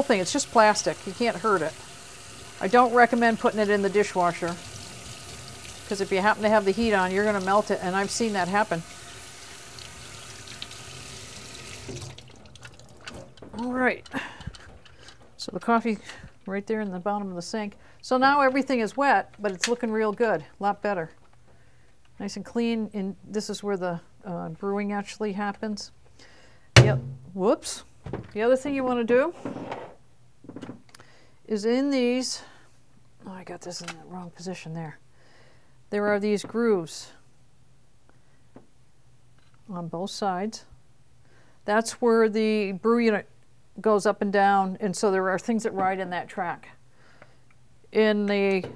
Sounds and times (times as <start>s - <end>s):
Speech: 0.0s - 1.8s, 2.6s - 4.6s, 5.9s - 8.8s, 13.6s - 14.0s, 15.4s - 21.2s, 22.2s - 25.9s, 27.4s - 29.4s, 31.5s - 32.5s, 33.2s - 35.0s, 35.9s - 37.2s, 39.7s - 40.7s, 41.7s - 46.8s, 47.9s - 48.7s
Water tap, faucet: 0.0s - 13.3s
Sink (filling or washing): 0.0s - 13.4s.